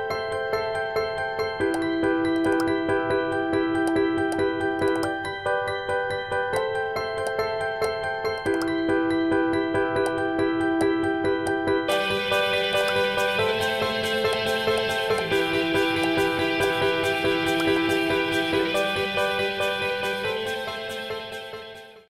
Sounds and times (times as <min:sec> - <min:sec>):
Music: 0:00.0 - 0:22.1.